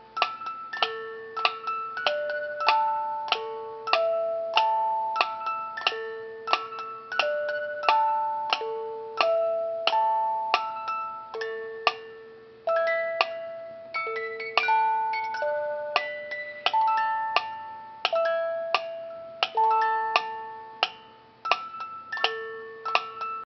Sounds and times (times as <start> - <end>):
Music: 0.0 - 23.4.